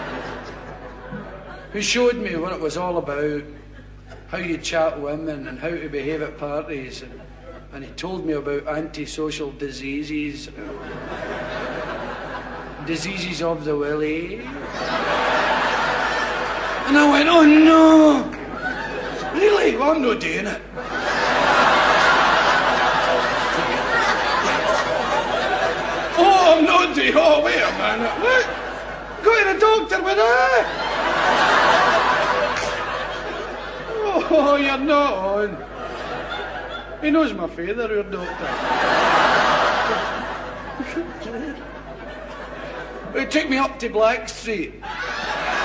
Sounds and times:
Speech: 1.7s - 3.6s, 4.3s - 10.8s, 12.8s - 14.5s, 16.9s - 18.4s, 19.3s - 20.7s, 26.1s - 28.5s, 29.2s - 30.7s, 33.9s - 35.6s, 37.0s - 38.4s, 43.1s - 44.8s.

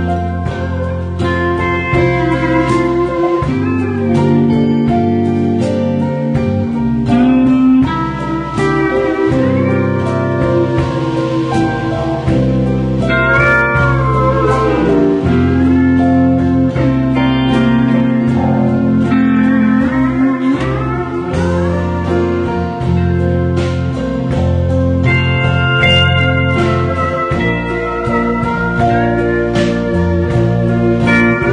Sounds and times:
Acoustic guitar: 0.0s - 31.5s.

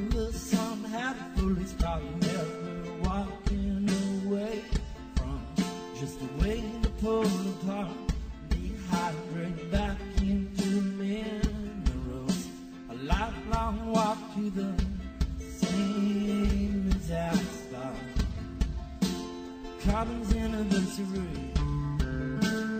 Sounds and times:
Music: 0.0s - 22.7s.

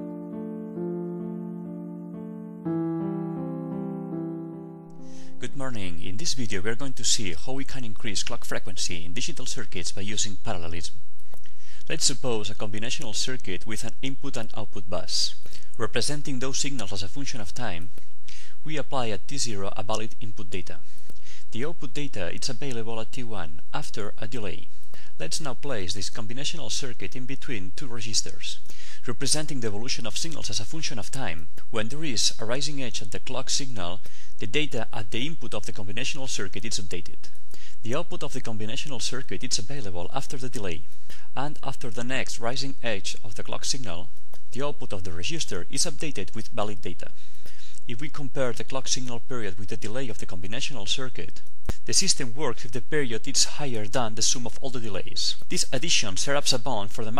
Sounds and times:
Speech: 5.4s - 11.0s, 11.8s - 17.9s, 18.6s - 20.8s, 21.5s - 47.2s, 47.9s - 57.1s.

